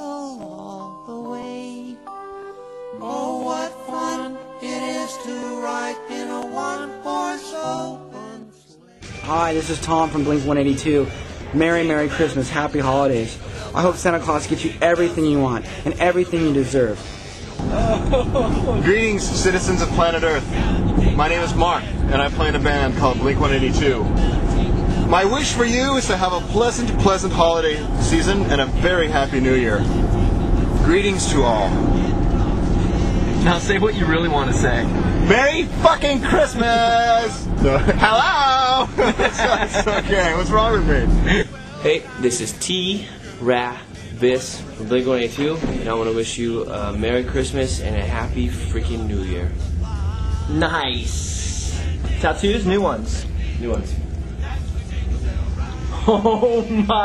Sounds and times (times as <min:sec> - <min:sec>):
Music: 0:00.0 - 0:57.0.